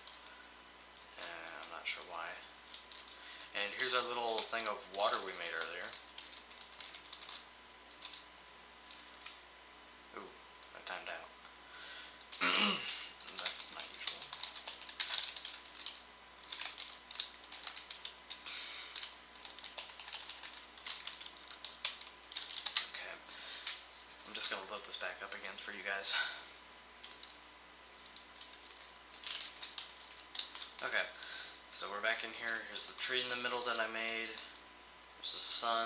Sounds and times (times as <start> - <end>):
Computer keyboard: 0.0 - 0.3, 2.7 - 3.2, 4.0 - 8.2, 8.8 - 9.4, 12.2 - 12.4, 13.2 - 18.4, 19.0 - 23.0, 27.0 - 30.8
Speech: 1.2 - 2.5, 3.5 - 5.9, 10.2 - 11.3, 12.5 - 14.4, 22.8 - 23.2, 24.3 - 26.4, 30.8 - 31.2, 31.8 - 34.5, 35.2 - 35.8.